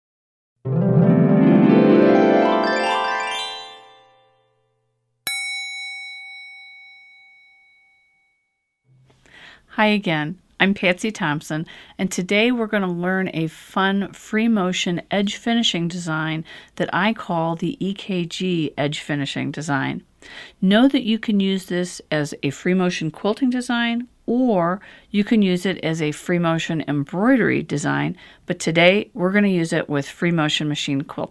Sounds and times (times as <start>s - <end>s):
Music: 0.6s - 5.0s
Speech: 9.7s - 31.3s.